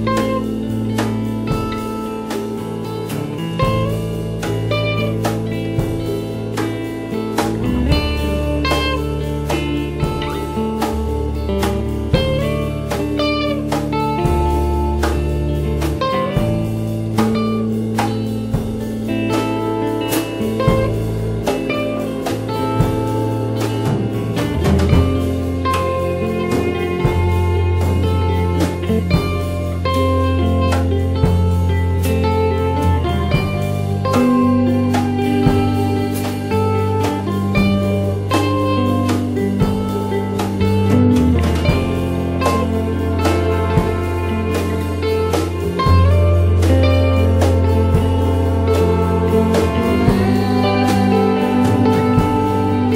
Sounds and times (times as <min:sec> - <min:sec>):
Steel guitar, slide guitar: 0:00.0 - 0:52.9.